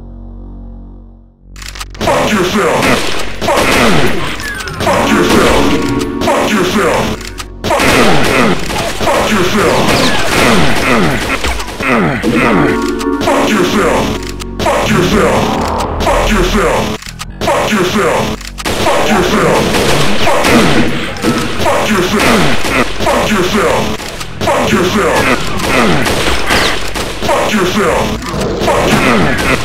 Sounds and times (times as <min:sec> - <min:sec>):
Speech: 0:02.0 - 0:04.2, 0:04.8 - 0:26.1, 0:27.2 - 0:29.6
Music: 0:04.9 - 0:07.8, 0:12.3 - 0:16.7.